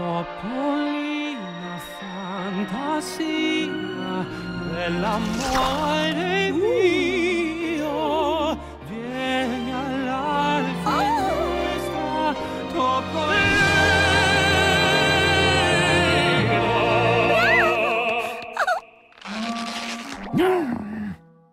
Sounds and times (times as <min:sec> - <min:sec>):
Music: 0:00.0 - 0:21.5.